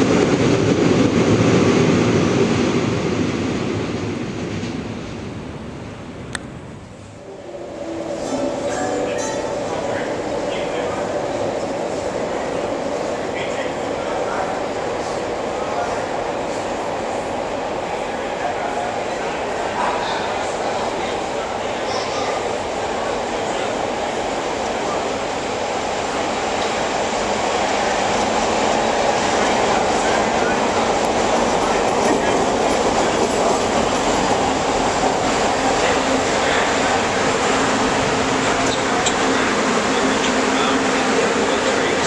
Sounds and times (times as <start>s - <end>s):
Railroad car, train wagon: 0.0s - 42.0s
Subway, metro, underground: 0.0s - 42.0s
Train: 0.0s - 42.0s
Speech: 8.7s - 16.3s, 18.1s - 25.2s, 38.4s - 42.0s.